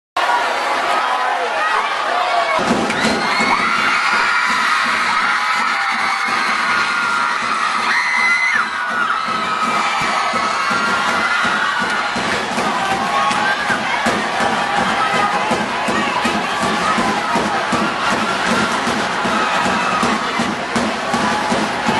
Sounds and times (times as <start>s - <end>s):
Children shouting: 0.2s - 20.5s
Cheering: 0.2s - 21.9s
Crowd: 0.2s - 21.9s.